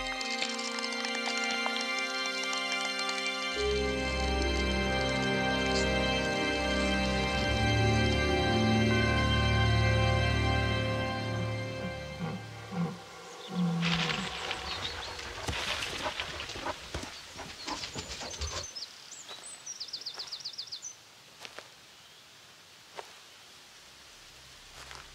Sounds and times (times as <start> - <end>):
Environmental noise: 0.0 - 25.1
Bird vocalization, bird call, bird song: 12.2 - 16.2, 17.0 - 21.0, 21.9 - 22.3.